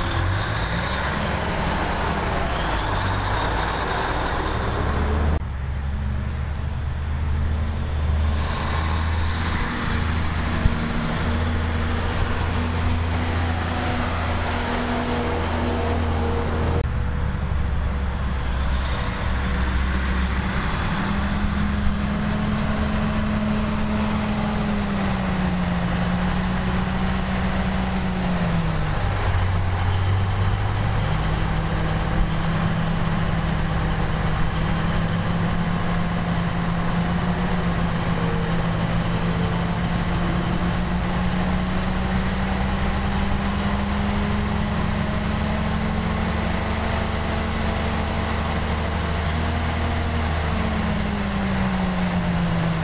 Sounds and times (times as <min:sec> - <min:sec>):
Truck: 0:00.0 - 0:52.8.